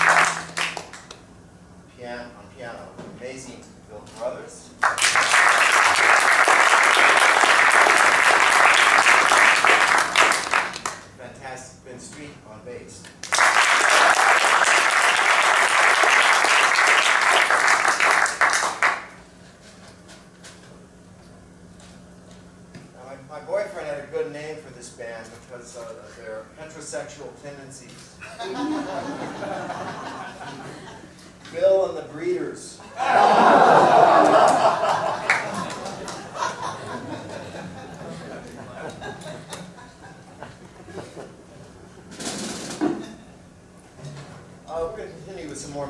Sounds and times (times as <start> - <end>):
Speech: 1.9 - 4.8, 11.2 - 13.1, 23.0 - 28.2, 31.5 - 32.8, 44.7 - 45.8.